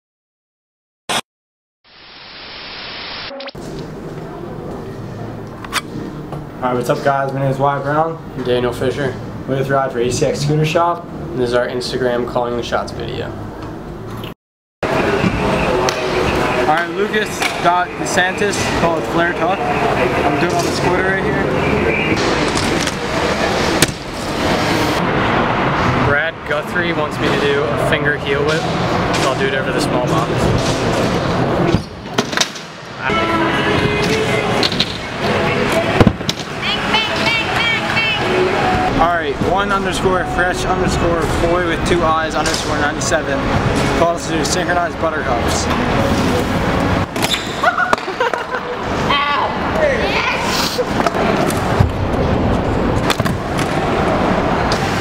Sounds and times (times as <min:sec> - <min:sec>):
Music: 0:33.1 - 0:38.9.